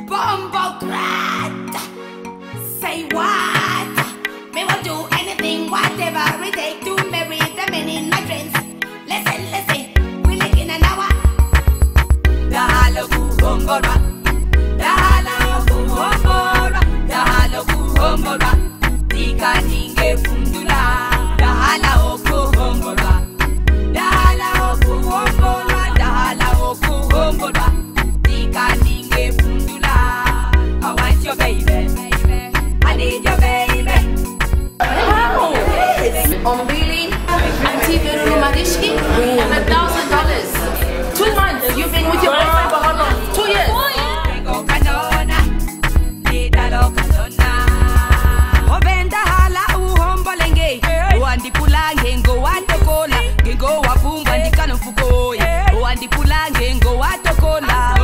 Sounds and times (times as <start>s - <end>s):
Music: 0.0s - 58.0s.